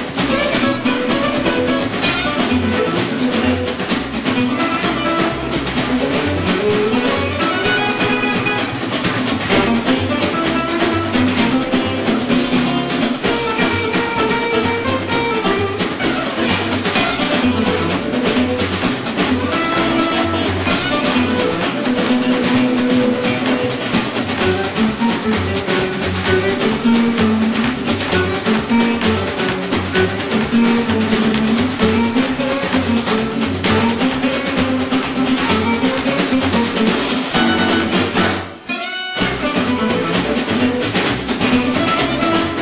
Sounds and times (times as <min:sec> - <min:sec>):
Blues: 0:00.0 - 0:42.6
Guitar: 0:00.0 - 0:42.6
Jazz: 0:00.0 - 0:42.6.